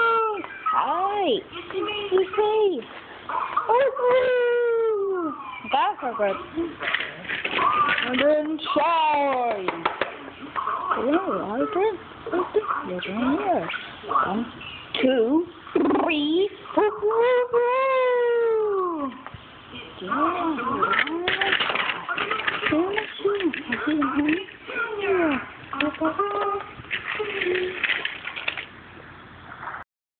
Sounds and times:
Speech: 0:03.7 - 0:06.8, 0:08.0 - 0:09.8, 0:11.0 - 0:27.8.

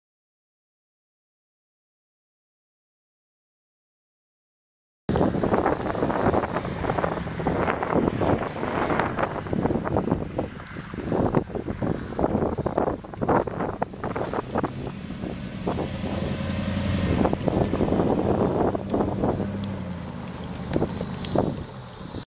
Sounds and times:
Car: 0:05.1 - 0:22.2.

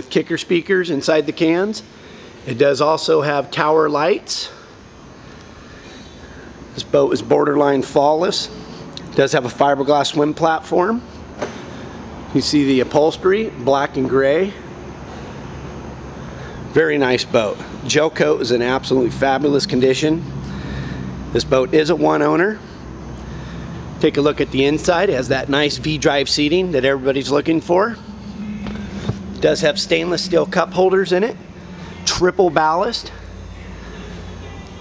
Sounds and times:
Speech: 0:00.0 - 0:01.8, 0:02.5 - 0:04.6, 0:06.8 - 0:11.0, 0:12.4 - 0:14.6, 0:16.7 - 0:20.2, 0:21.4 - 0:22.6, 0:24.0 - 0:28.7, 0:29.3 - 0:31.4, 0:32.1 - 0:33.2.

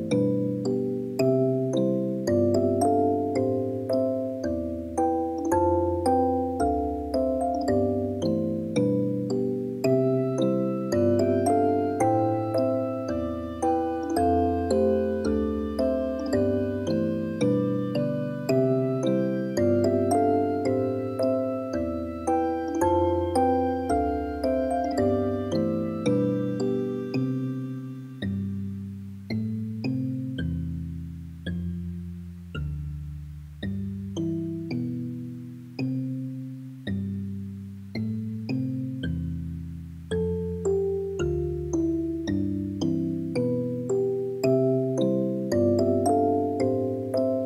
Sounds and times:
Music: 0:00.0 - 0:47.4.

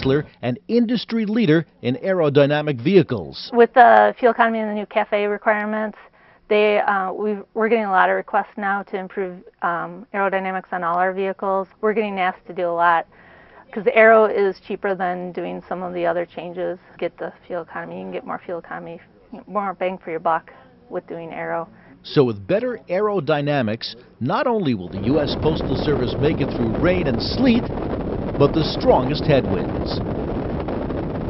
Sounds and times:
Speech: 0:00.0 - 0:13.0, 0:13.7 - 0:27.7, 0:28.4 - 0:30.0.

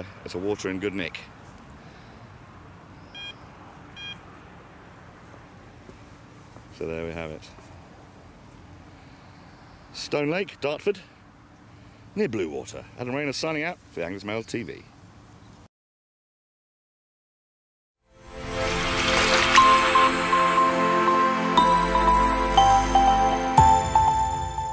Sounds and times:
Speech: 0:00.0 - 0:01.3, 0:06.8 - 0:07.6, 0:10.0 - 0:11.1, 0:12.2 - 0:14.9
Music: 0:18.1 - 0:24.7.

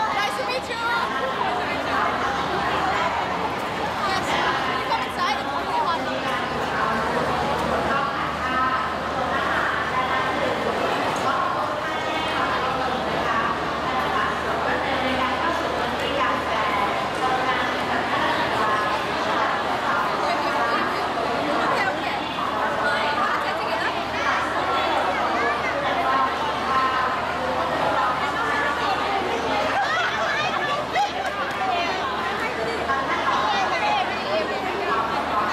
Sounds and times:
Speech: 0:00.0 - 0:35.5.

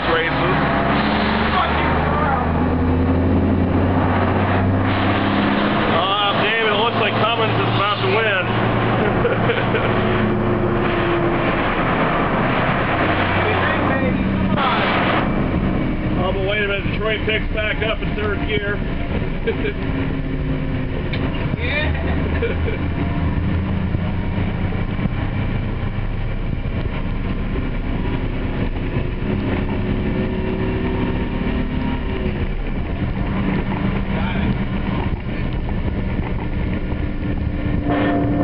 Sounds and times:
Bus: 0:00.0 - 0:38.4.

